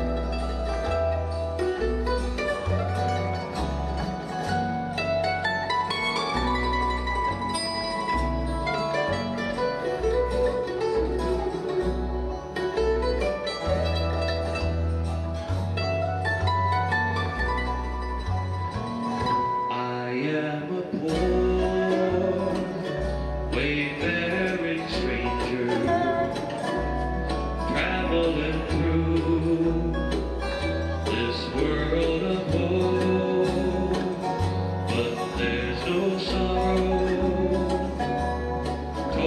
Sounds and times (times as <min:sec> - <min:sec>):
Music: 0:00.0 - 0:39.2
Male singing: 0:19.7 - 0:26.5, 0:27.7 - 0:30.4, 0:31.1 - 0:34.3, 0:34.9 - 0:39.2.